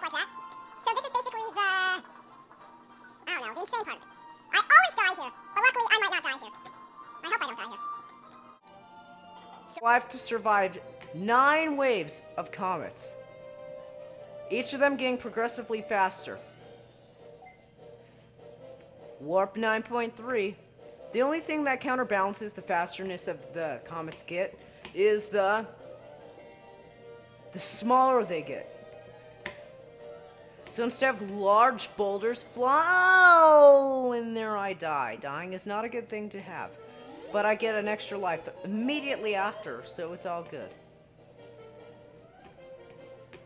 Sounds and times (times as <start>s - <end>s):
Speech: 0.0s - 2.0s, 4.6s - 6.6s, 9.7s - 13.2s, 14.5s - 16.4s, 19.2s - 20.6s, 21.2s - 25.7s, 27.6s - 28.6s, 30.7s - 36.7s, 37.4s - 40.8s.